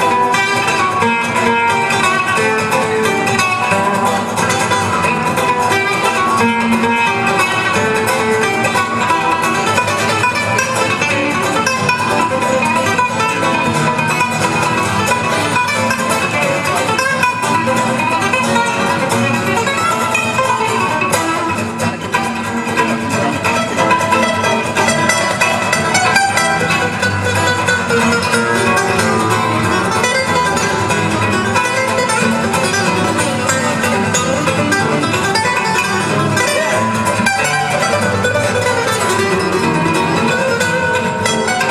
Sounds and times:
Acoustic guitar: 0.0s - 41.7s
Strum: 0.0s - 41.7s.

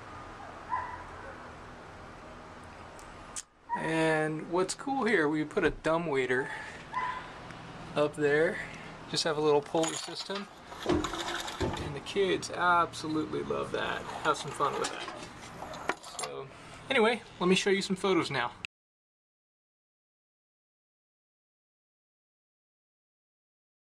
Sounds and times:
Speech: 3.8s - 6.6s, 8.0s - 10.5s, 11.7s - 15.1s, 16.2s - 18.7s.

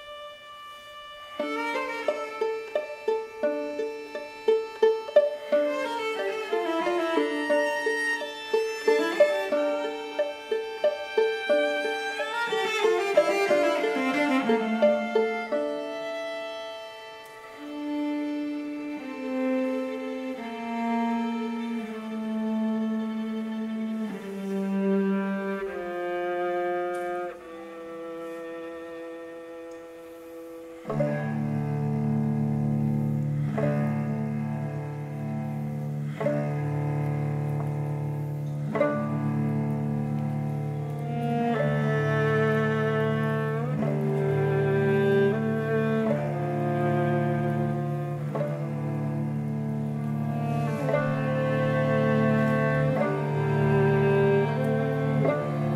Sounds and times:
String section: 0.0s - 55.7s.

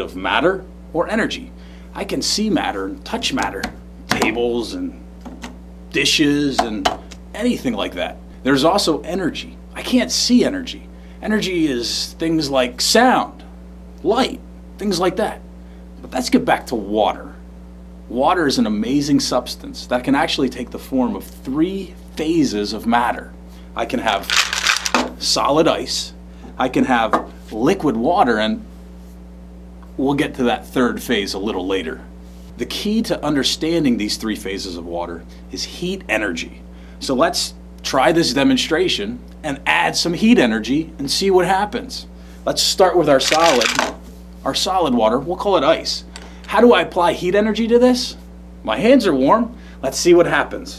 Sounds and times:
Speech: 0.0s - 5.0s, 5.9s - 15.4s, 16.0s - 17.4s, 18.1s - 24.4s, 25.2s - 28.7s, 30.0s - 50.7s.

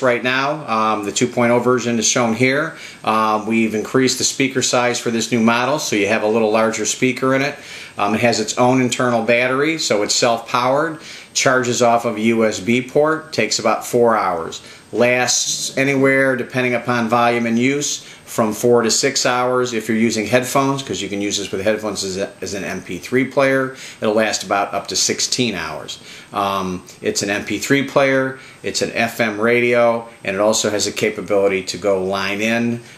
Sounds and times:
Speech: 0.0s - 32.9s.

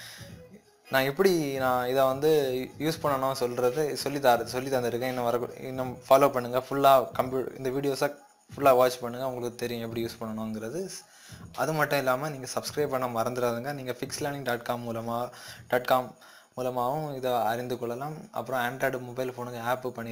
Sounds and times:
Speech: 0.2s - 20.1s.

